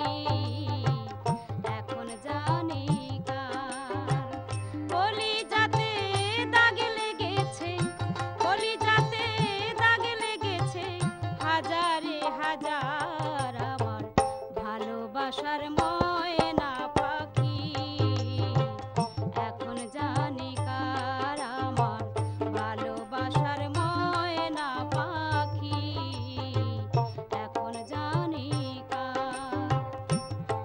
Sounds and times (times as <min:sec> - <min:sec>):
Female singing: 0:00.0 - 0:30.6
Music: 0:00.0 - 0:30.6.